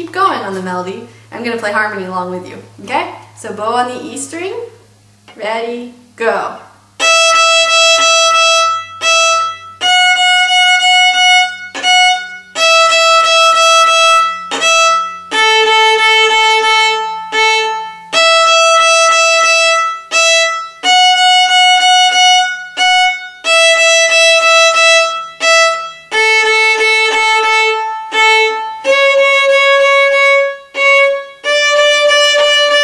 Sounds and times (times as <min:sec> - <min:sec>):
Speech: 0:00.0 - 0:06.7
Violin, fiddle: 0:07.0 - 0:32.8.